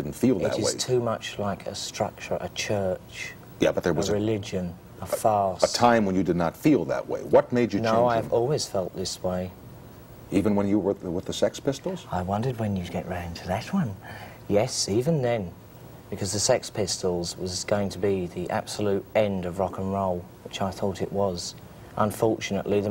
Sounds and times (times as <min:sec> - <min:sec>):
Speech: 0:00.0 - 0:09.5, 0:10.3 - 0:22.9.